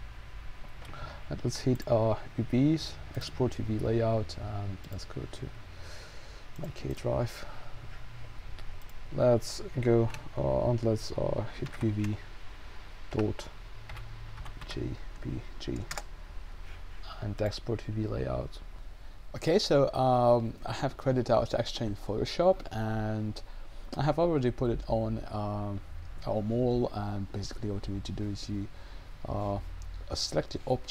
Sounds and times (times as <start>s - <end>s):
Speech: 1.3s - 5.6s, 6.6s - 7.5s, 9.1s - 12.3s, 13.1s - 13.6s, 14.6s - 16.0s, 17.0s - 18.6s, 19.4s - 30.9s.